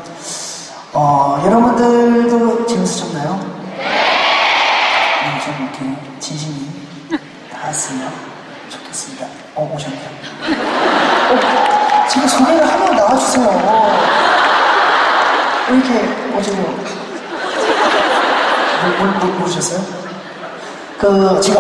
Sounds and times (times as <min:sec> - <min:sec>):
Speech: 0:00.0 - 0:03.5, 0:05.2 - 0:06.8, 0:07.5 - 0:10.2, 0:12.1 - 0:14.1, 0:15.7 - 0:17.0, 0:18.8 - 0:20.0, 0:21.0 - 0:21.6.